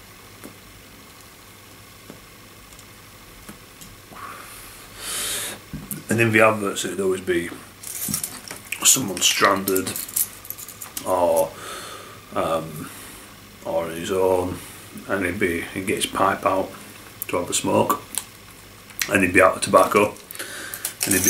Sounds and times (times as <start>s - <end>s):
Inside, small room: 0.0s - 21.2s
Speech: 6.0s - 7.6s, 8.8s - 10.0s, 11.0s - 11.6s, 12.4s - 12.9s, 13.6s - 18.1s, 19.0s - 20.2s, 21.0s - 21.2s.